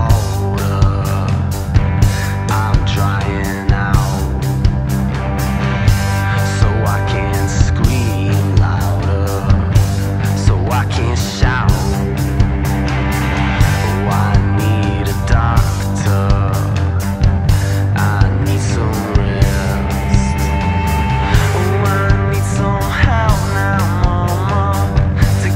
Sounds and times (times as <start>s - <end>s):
Rhythm and blues: 0.0s - 25.5s.